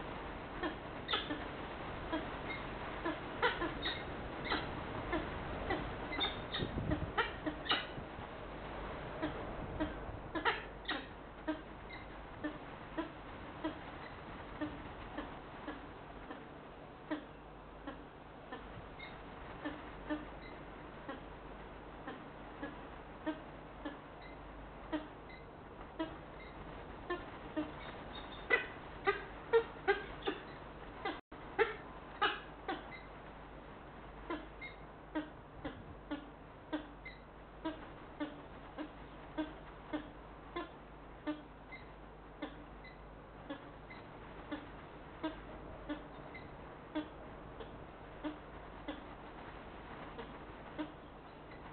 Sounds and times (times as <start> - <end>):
Bird: 0.6 - 1.5, 2.1 - 8.0, 9.2 - 16.5, 17.1 - 21.3, 22.0 - 33.2, 34.2 - 49.3, 50.0 - 51.7.